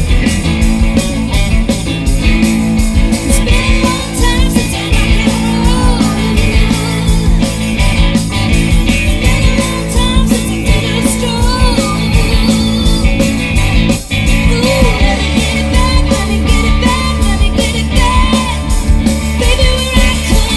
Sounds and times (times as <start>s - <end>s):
Rock and roll: 0.0s - 20.5s.